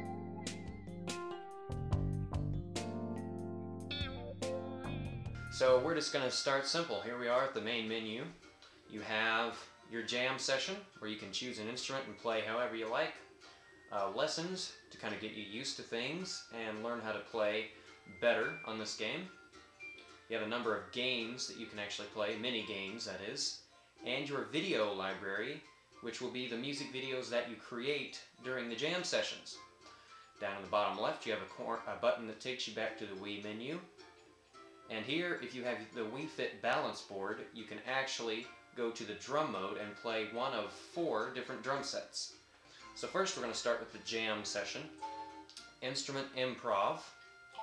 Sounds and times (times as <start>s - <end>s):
Music: 0.0s - 47.6s
Speech: 5.6s - 13.2s, 13.9s - 19.3s, 20.3s - 29.6s, 30.4s - 33.9s, 34.9s - 42.4s, 43.0s - 45.0s, 45.8s - 47.2s.